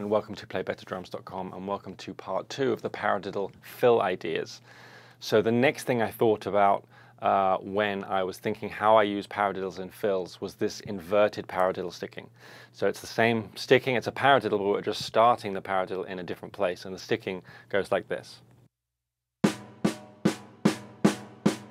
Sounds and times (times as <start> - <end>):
Speech: 0.0 - 4.6, 5.2 - 18.5.